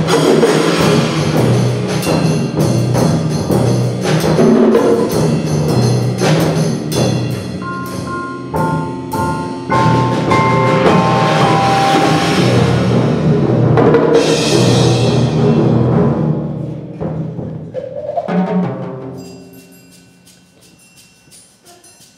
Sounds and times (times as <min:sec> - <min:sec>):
Timpani: 0:00.0 - 0:20.8.